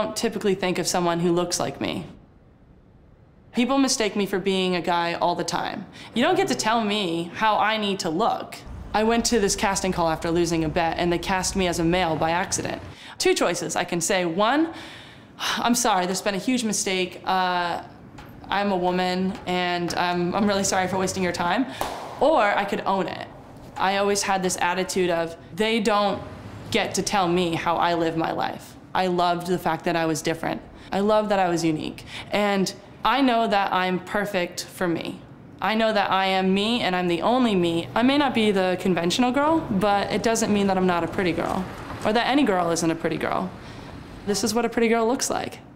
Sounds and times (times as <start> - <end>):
Speech: 0.0 - 2.2, 3.6 - 14.8, 15.4 - 17.9, 18.5 - 43.6, 44.3 - 45.6.